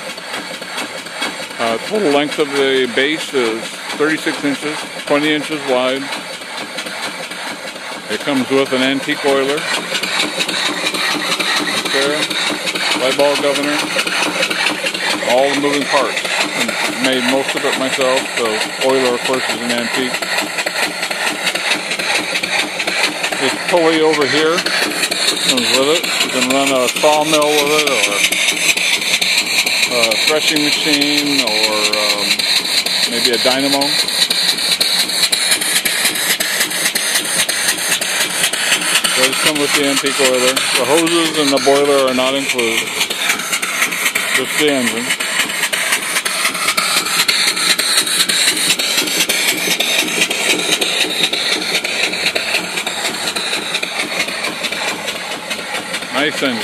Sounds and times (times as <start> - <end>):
Speech: 1.6 - 6.1, 8.1 - 9.7, 11.8 - 12.3, 13.0 - 13.8, 15.2 - 20.2, 23.4 - 24.7, 25.5 - 28.3, 29.9 - 32.4, 33.1 - 34.0, 39.2 - 42.9, 44.3 - 45.1, 56.1 - 56.6.